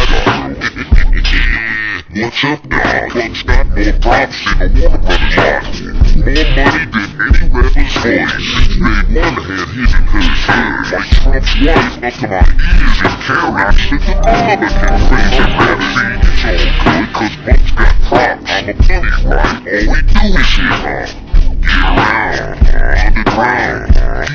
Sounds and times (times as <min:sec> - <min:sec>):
Music: 0:00.0 - 0:24.3.